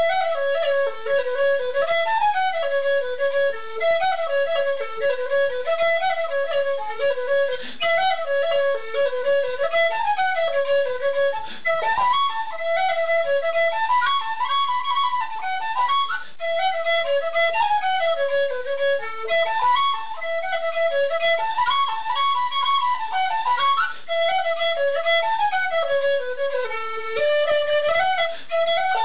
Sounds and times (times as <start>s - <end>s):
Flute: 0.0s - 29.0s.